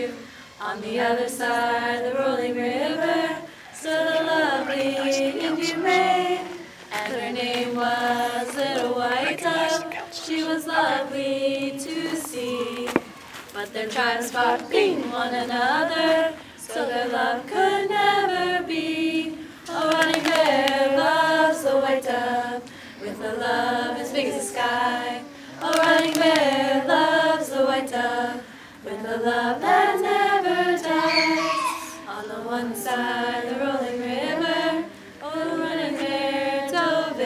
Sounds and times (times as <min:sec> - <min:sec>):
Speech: 0:04.3 - 0:06.4, 0:08.4 - 0:10.6.